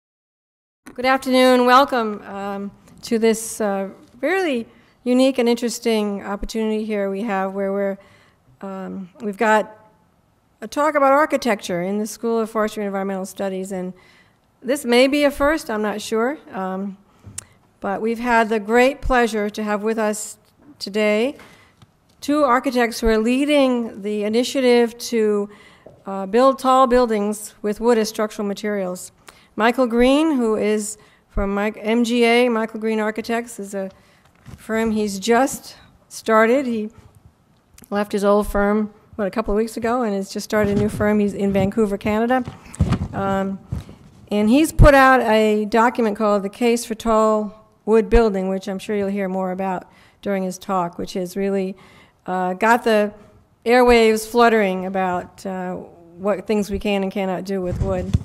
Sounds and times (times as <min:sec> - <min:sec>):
Speech: 0:00.9 - 0:08.0, 0:08.6 - 0:09.8, 0:10.6 - 0:14.0, 0:14.6 - 0:17.0, 0:17.8 - 0:21.4, 0:22.2 - 0:34.0, 0:34.6 - 0:37.0, 0:37.8 - 0:42.5, 0:43.1 - 0:43.7, 0:44.3 - 0:58.2.